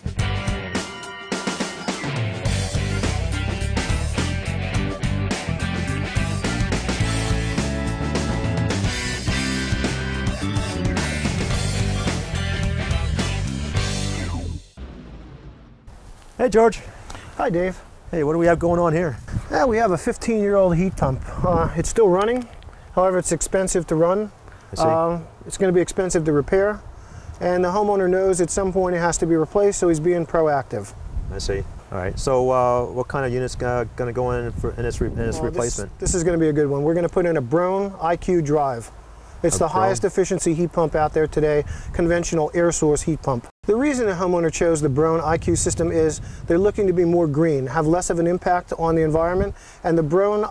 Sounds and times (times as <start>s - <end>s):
Speech: 16.4s - 26.8s, 27.4s - 50.5s.